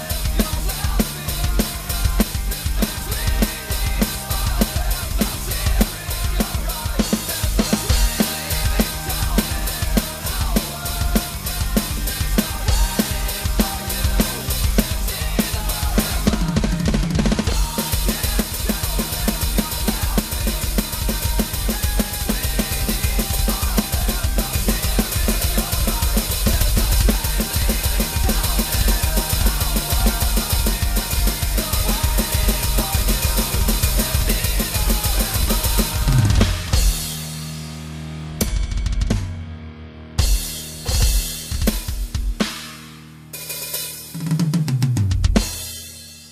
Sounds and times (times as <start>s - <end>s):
Bass drum: 0.0s - 37.6s, 38.4s - 39.5s, 40.2s - 42.9s, 44.2s - 45.7s
Drum kit: 0.0s - 46.3s.